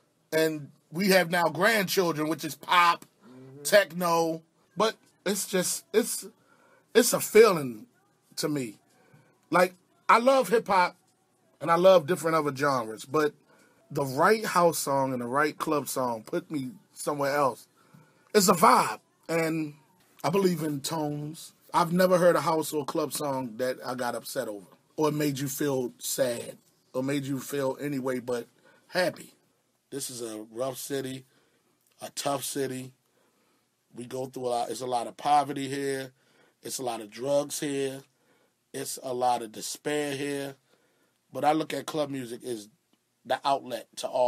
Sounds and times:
Speech: 0.3 - 17.7, 18.3 - 31.3, 32.0 - 33.0, 33.9 - 38.1, 38.7 - 40.6, 41.3 - 44.2.

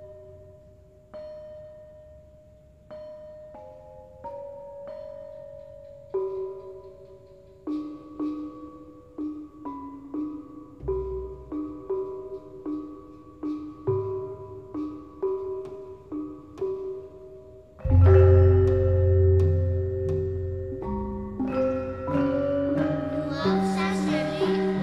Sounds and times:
Classical music: 17.8 - 24.8.

